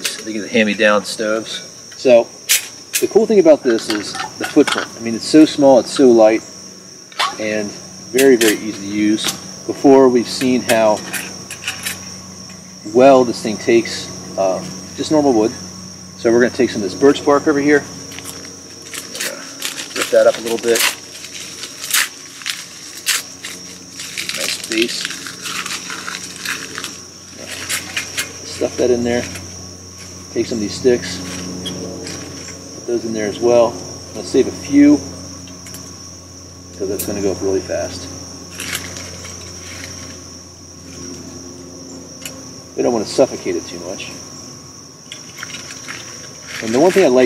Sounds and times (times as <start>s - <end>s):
Speech: 0.0s - 2.3s, 3.0s - 6.4s, 7.4s - 11.0s, 12.9s - 15.6s, 16.2s - 17.9s, 20.0s - 20.9s, 24.4s - 25.1s, 28.5s - 29.4s, 30.4s - 31.2s, 32.9s - 35.0s, 36.8s - 38.1s, 42.8s - 44.2s, 46.6s - 47.2s
Outside, rural or natural: 0.0s - 47.2s.